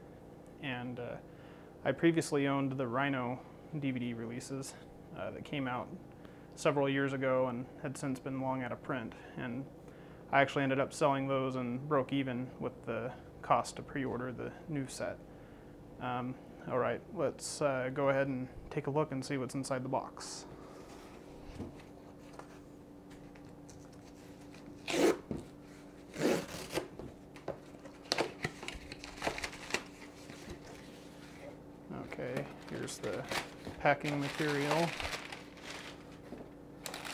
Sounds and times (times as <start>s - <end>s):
Speech: 0.6s - 1.2s, 1.8s - 6.0s, 6.6s - 9.7s, 10.3s - 15.2s, 16.0s - 20.5s, 31.9s - 35.0s.